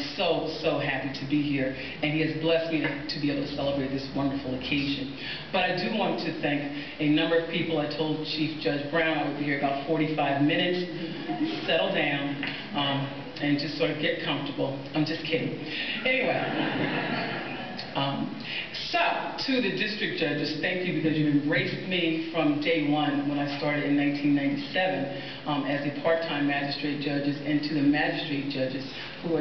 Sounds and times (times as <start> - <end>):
Narration, monologue: 0.0 - 29.4.